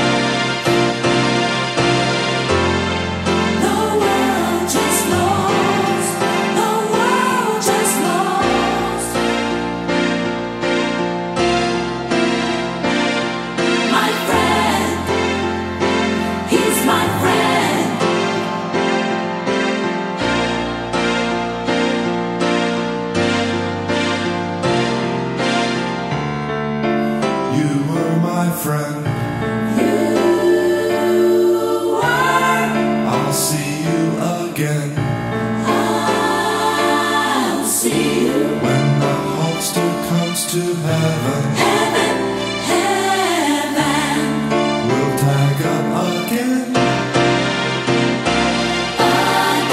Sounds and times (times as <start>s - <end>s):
Music: 0.0s - 49.7s
Singing: 3.6s - 9.5s, 16.4s - 18.4s, 29.6s - 35.0s, 35.6s - 47.0s, 49.0s - 49.7s.